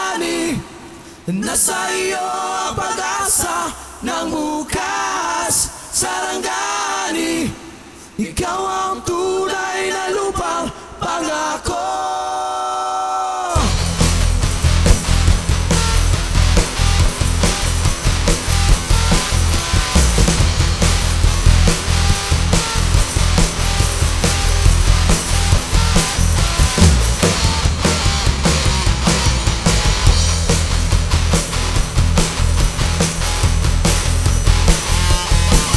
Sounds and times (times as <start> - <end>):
Music: 13.6 - 35.7.